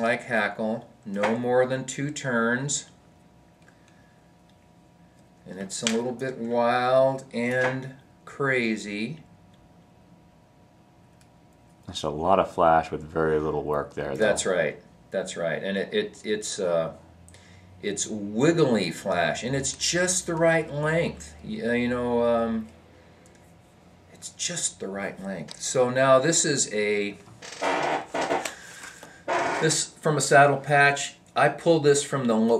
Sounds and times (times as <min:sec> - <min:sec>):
Speech: 0:00.0 - 0:02.9, 0:05.4 - 0:09.2, 0:11.9 - 0:17.0, 0:17.8 - 0:22.7, 0:24.1 - 0:27.2, 0:29.6 - 0:32.5.